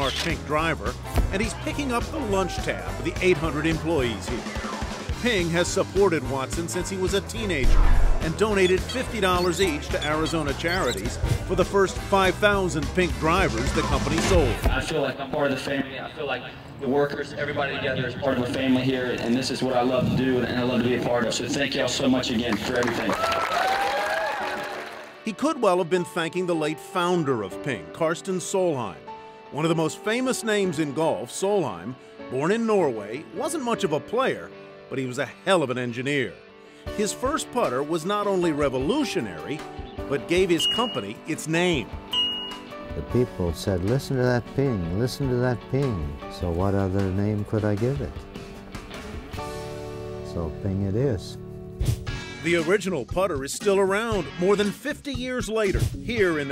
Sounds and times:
Speech: 0.0 - 4.4, 5.2 - 23.2, 25.3 - 29.0, 37.0 - 41.9, 43.0 - 48.2, 50.3 - 51.4, 52.4 - 56.5
Music: 0.0 - 56.5.

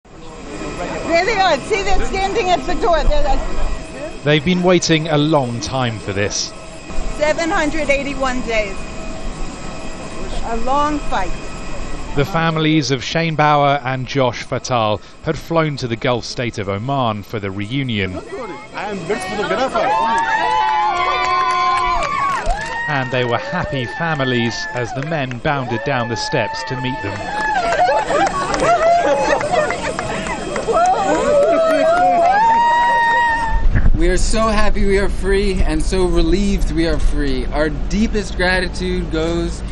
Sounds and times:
Outside, urban or manmade: 0.0 - 39.7
Hubbub, speech noise, speech babble: 0.1 - 6.5, 7.1 - 35.2
Speech: 4.3 - 6.5, 12.2 - 19.9, 22.9 - 27.2, 34.0 - 39.6.

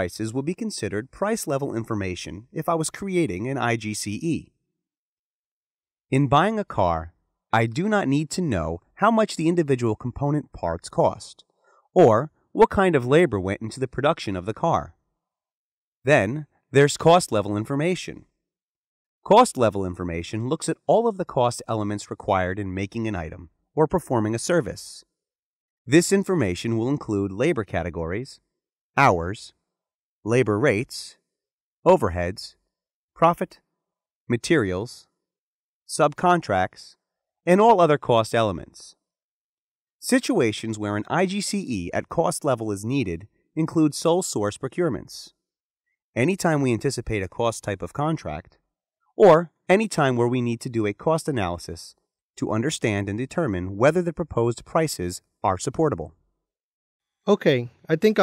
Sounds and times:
Speech: 0.0 - 4.5, 6.1 - 15.0, 16.1 - 18.3, 19.2 - 25.1, 25.9 - 28.4, 29.0 - 29.6, 30.3 - 31.2, 31.9 - 32.6, 33.2 - 33.6, 34.3 - 35.1, 35.9 - 39.0, 40.0 - 45.4, 46.2 - 48.5, 49.2 - 56.1, 57.3 - 58.2.

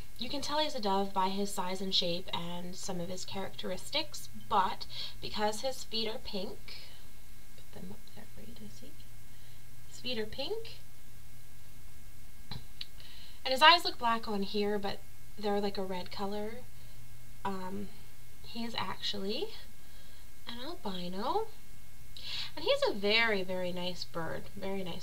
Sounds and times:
Speech: 0.2 - 7.0, 7.6 - 9.0, 9.9 - 10.8, 13.4 - 16.7, 17.4 - 19.7, 20.5 - 21.6, 22.4 - 25.0.

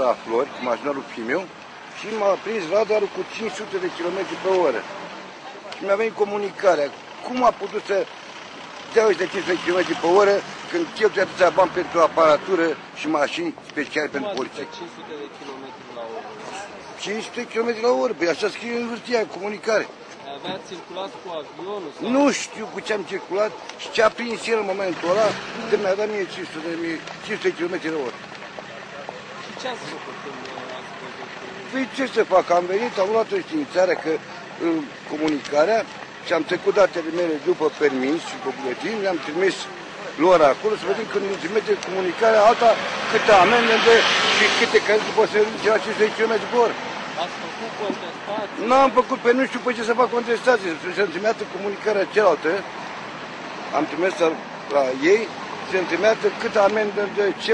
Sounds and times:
Speech: 0.0 - 8.1, 8.9 - 28.2, 29.0 - 52.7, 53.7 - 57.5.

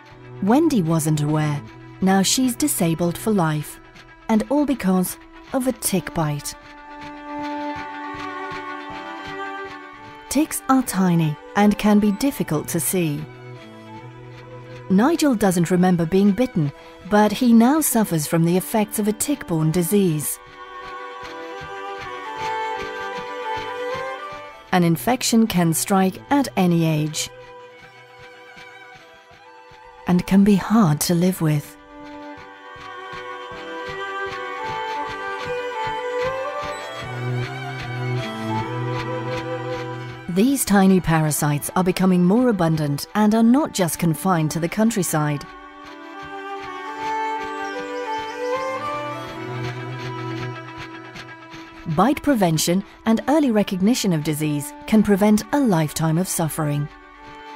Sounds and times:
Music: 0.0 - 57.5
Speech: 0.4 - 6.6, 10.3 - 13.3, 14.9 - 20.4, 24.7 - 27.3, 30.1 - 31.8, 40.3 - 45.5, 51.8 - 56.9.

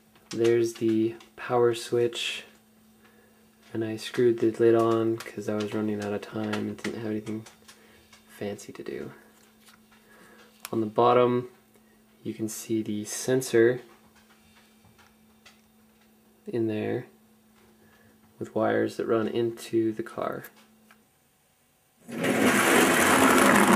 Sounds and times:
Speech: 0.3 - 2.6, 3.7 - 7.5, 8.3 - 9.3, 10.7 - 11.6, 12.2 - 13.9, 16.5 - 17.2, 18.4 - 20.6.

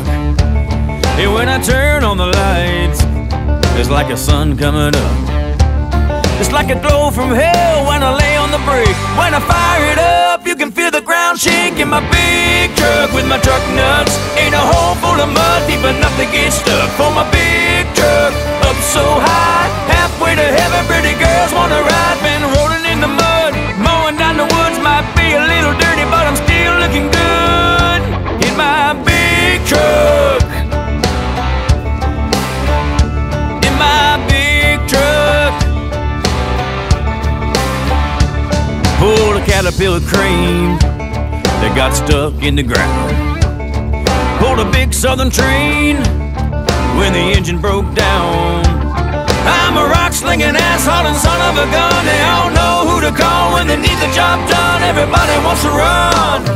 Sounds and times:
Music: 0.0 - 56.5.

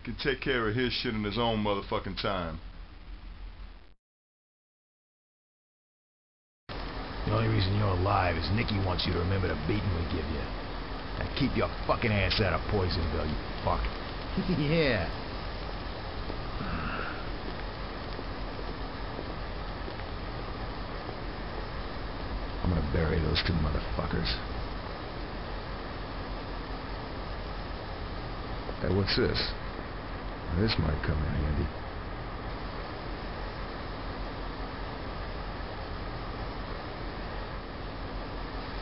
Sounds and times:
Speech: 0.0 - 2.6, 7.2 - 10.5, 11.2 - 15.2, 22.6 - 24.5, 28.8 - 29.6, 30.5 - 31.7.

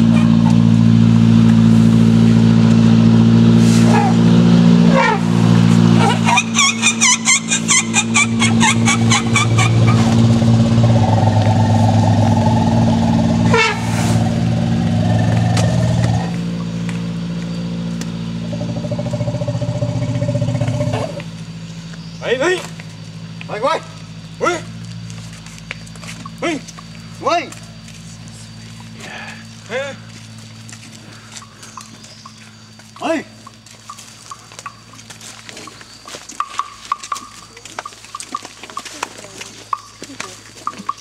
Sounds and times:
Motor vehicle (road): 0.0 - 41.0.

